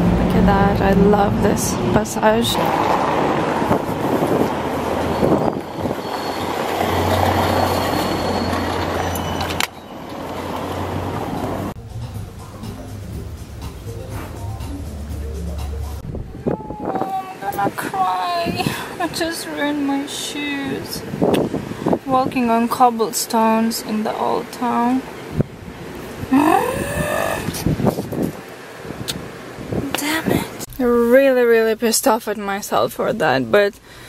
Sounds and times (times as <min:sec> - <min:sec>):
Outside, rural or natural: 0:00.0 - 0:34.0
Speech: 0:00.3 - 0:02.8, 0:16.3 - 0:21.0, 0:22.1 - 0:25.0, 0:29.9 - 0:33.8.